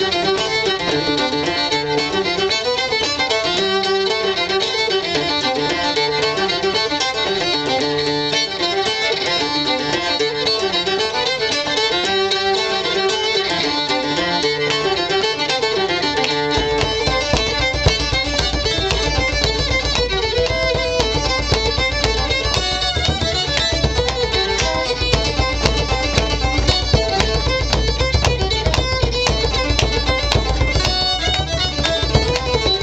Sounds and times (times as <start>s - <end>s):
Musical instrument: 0.0s - 32.8s.